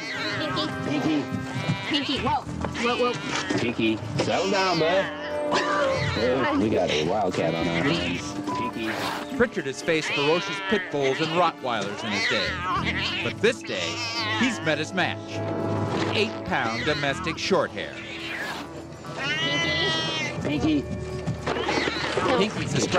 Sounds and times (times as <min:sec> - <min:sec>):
Music: 0:00.0 - 0:22.9.